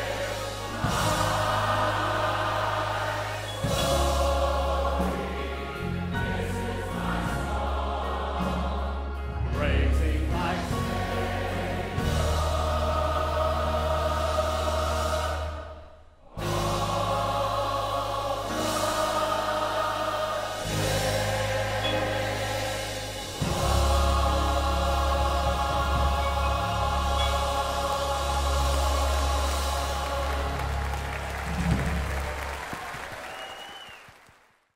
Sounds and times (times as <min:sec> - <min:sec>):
Gospel music: 0:00.0 - 0:34.5.